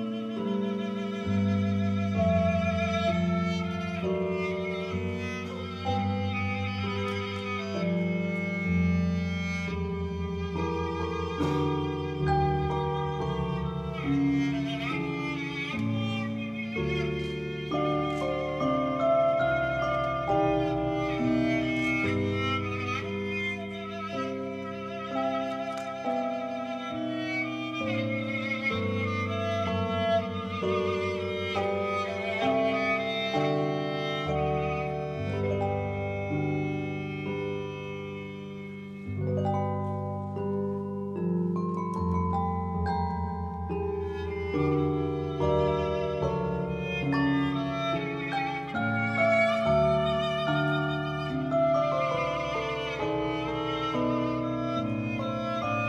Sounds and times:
Musical instrument: 0.0 - 55.8.

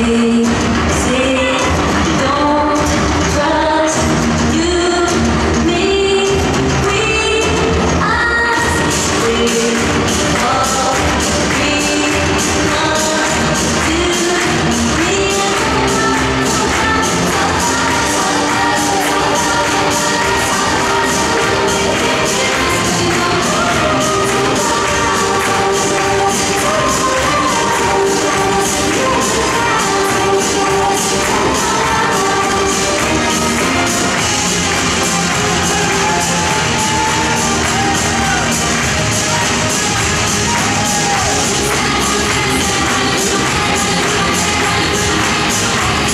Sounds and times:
Music: 0.0 - 46.1.

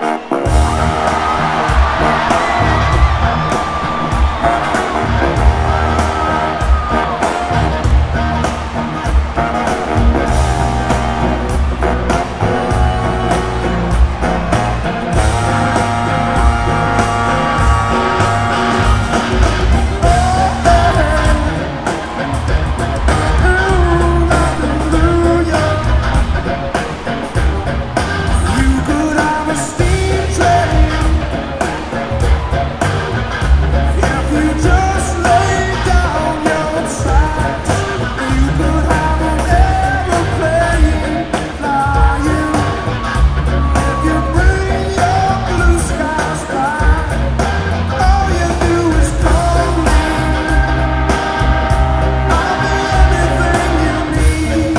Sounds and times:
Music: 0.0 - 54.7.

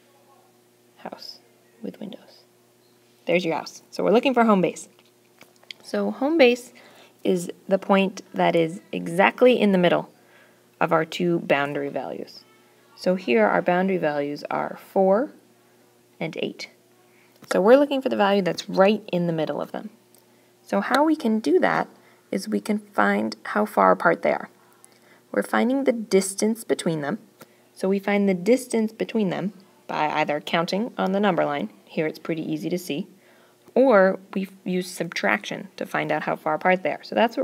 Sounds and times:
Speech: 0.0 - 2.4, 3.3 - 4.9, 5.7 - 10.1, 10.8 - 12.4, 13.0 - 15.4, 16.2 - 16.8, 17.5 - 20.0, 20.7 - 24.6, 25.3 - 27.2, 27.8 - 33.1, 33.8 - 37.4.

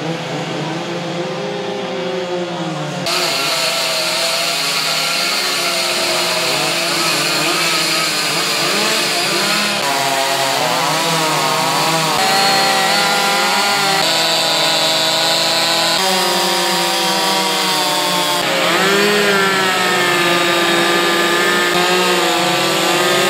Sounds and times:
Power tool: 3.0 - 23.3.

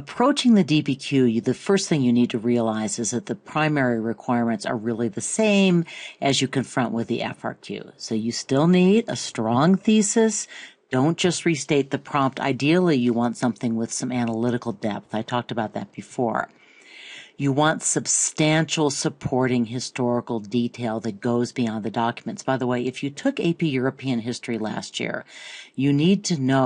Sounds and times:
Speech: 0.0 - 26.6.

